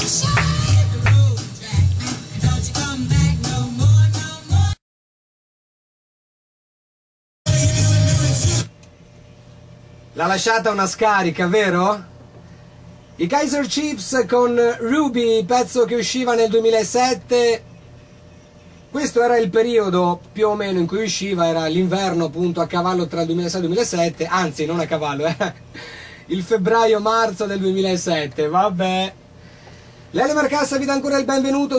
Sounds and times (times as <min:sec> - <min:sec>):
Music: 0:00.0 - 0:04.8, 0:07.5 - 0:08.9
Speech: 0:10.2 - 0:12.1, 0:13.2 - 0:17.7, 0:18.9 - 0:25.6, 0:26.3 - 0:29.2, 0:30.1 - 0:31.7.